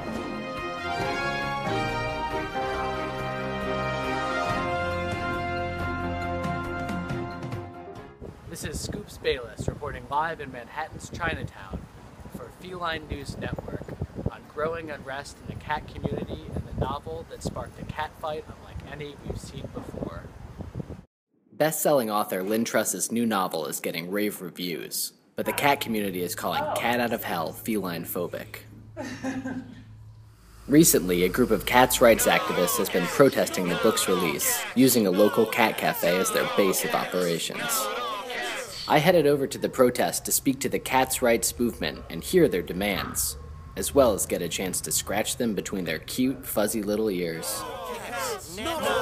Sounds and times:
Speech: 8.5 - 11.8, 12.4 - 20.3, 21.6 - 28.7, 30.7 - 49.0.

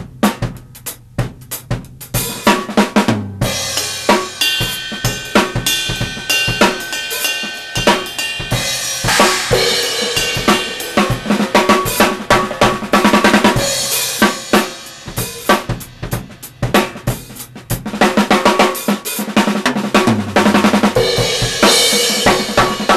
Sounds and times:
Snare drum: 0.0 - 22.9.

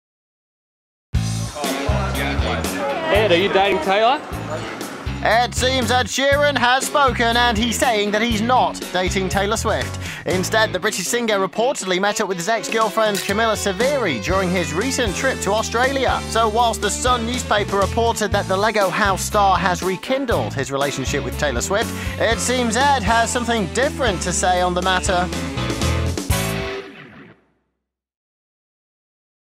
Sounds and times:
Music: 1.2 - 27.7
Speech: 1.6 - 25.3.

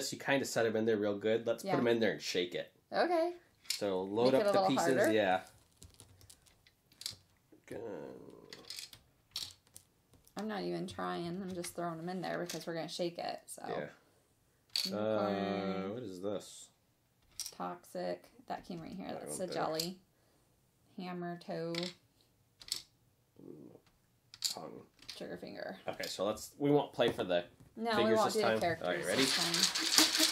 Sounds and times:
Inside, small room: 0.0 - 30.3
Speech: 1.6 - 2.4, 3.9 - 5.4, 13.6 - 14.0, 14.9 - 16.6.

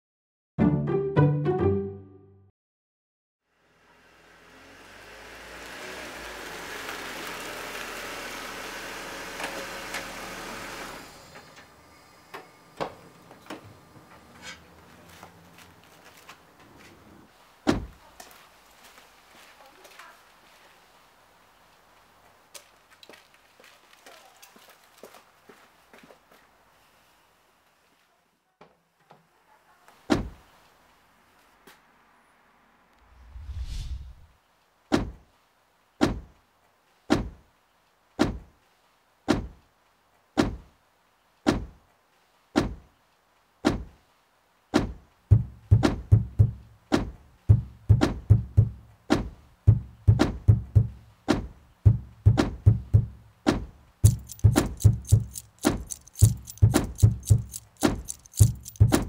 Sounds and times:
Music: 0.6 - 2.5.

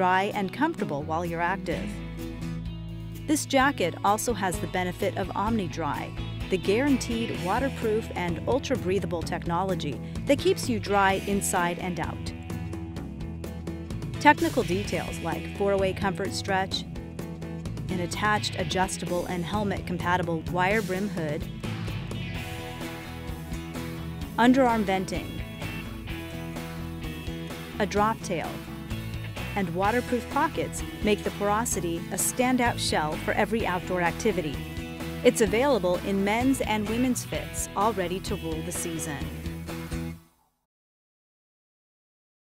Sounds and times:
Speech: 0.0 - 1.9, 3.3 - 12.3, 14.2 - 16.8, 17.9 - 21.4, 24.4 - 25.4, 27.8 - 28.6, 29.6 - 34.6, 35.2 - 39.4
Music: 0.0 - 40.7.

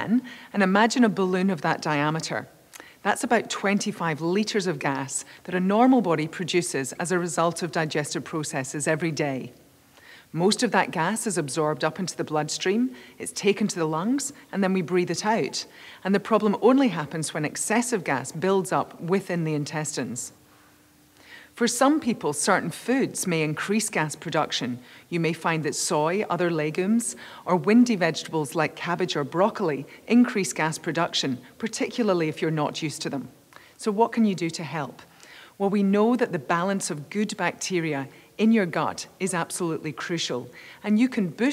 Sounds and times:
Speech: 0.0 - 9.6, 10.4 - 20.4, 21.6 - 41.5.

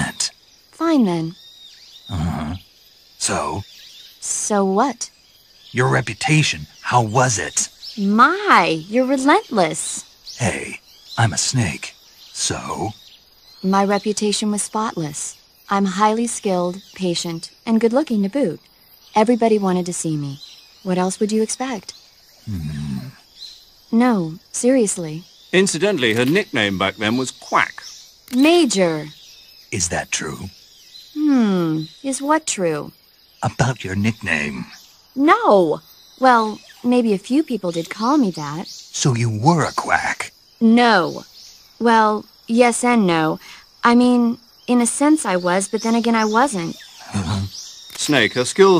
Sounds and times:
Speech: 0.0 - 1.4, 2.1 - 2.6, 3.2 - 3.6, 4.2 - 5.1, 5.8 - 13.0, 13.7 - 18.6, 19.2 - 21.9, 22.5 - 23.2, 24.0 - 29.1, 29.8 - 30.5, 31.2 - 41.2, 41.8 - 48.8.

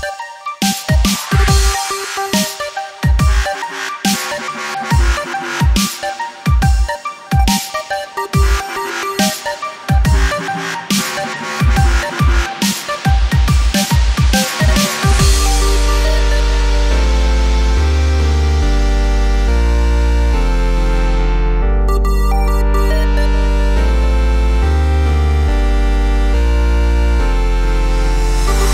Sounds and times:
Dubstep: 0.0 - 21.2, 22.0 - 28.7.

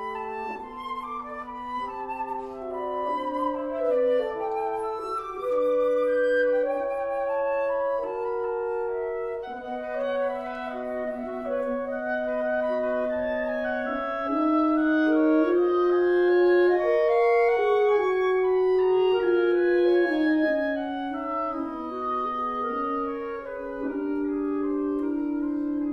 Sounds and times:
Orchestra: 0.0 - 25.9.

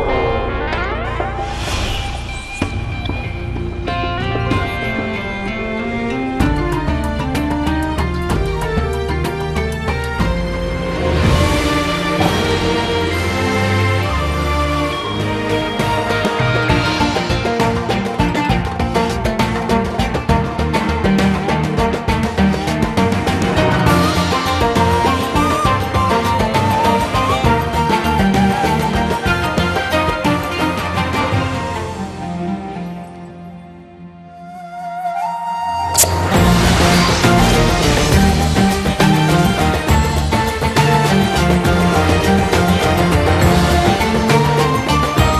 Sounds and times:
Music: 0.0 - 45.3.

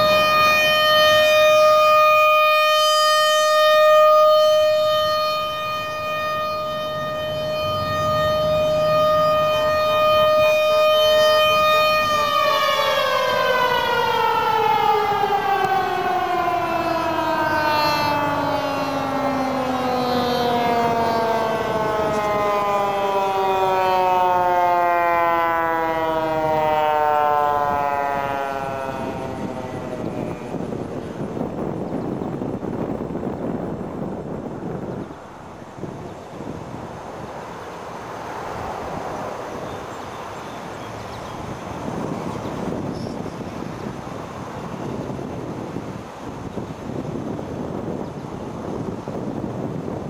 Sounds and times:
Civil defense siren: 0.0 - 50.0.

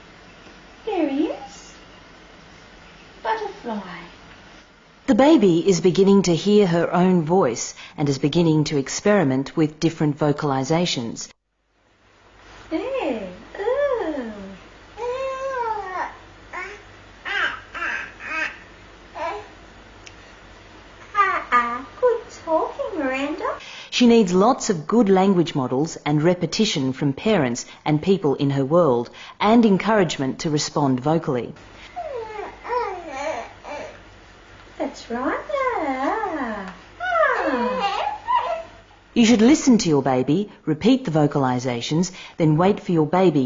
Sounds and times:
Speech: 0.8 - 1.8, 3.2 - 4.2, 5.1 - 11.3, 12.7 - 14.6, 21.3 - 31.6, 34.8 - 38.0, 39.2 - 43.4.

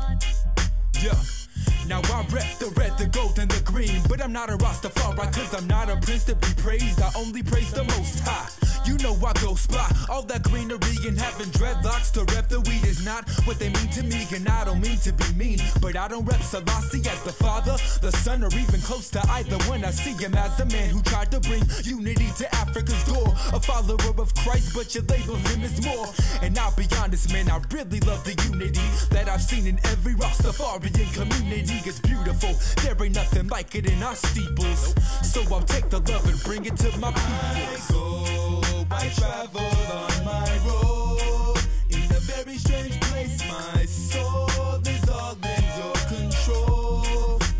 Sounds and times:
Music: 0.0 - 47.5.

